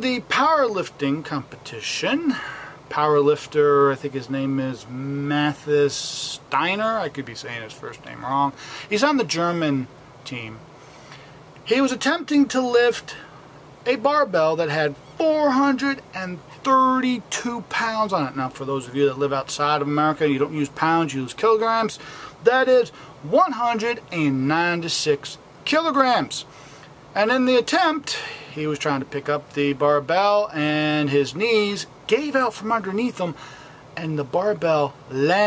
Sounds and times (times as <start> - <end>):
Speech: 0.0 - 10.6, 11.6 - 26.5, 27.2 - 33.4, 34.0 - 35.4.